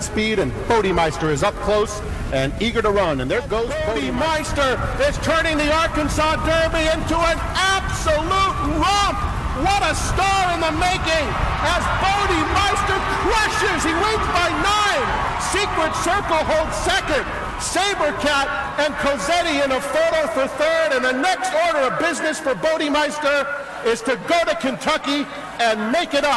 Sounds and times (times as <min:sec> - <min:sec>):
Speech: 0:00.0 - 0:26.3.